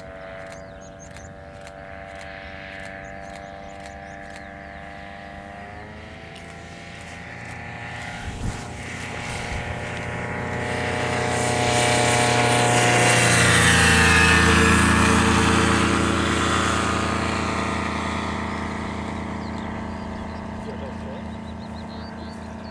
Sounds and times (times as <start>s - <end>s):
Aircraft: 0.0s - 22.7s
Engine: 0.0s - 22.7s
Speech: 20.6s - 21.3s.